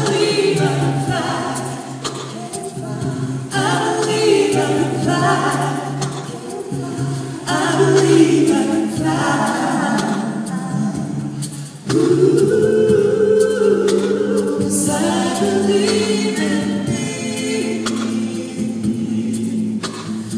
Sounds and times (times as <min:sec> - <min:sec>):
Singing: 0:00.0 - 0:20.3
Vocal music: 0:00.0 - 0:20.3.